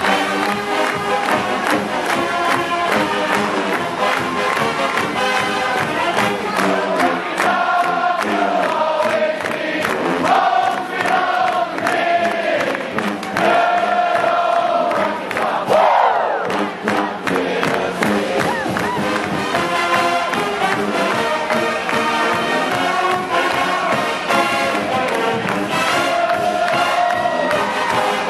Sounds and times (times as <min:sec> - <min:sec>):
Background music: 0:00.0 - 0:28.3.